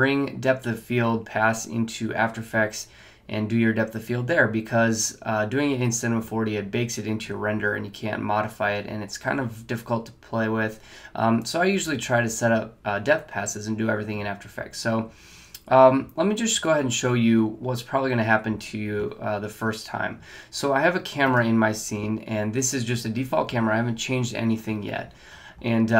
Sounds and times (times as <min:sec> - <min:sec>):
Speech: 0:00.0 - 0:26.0.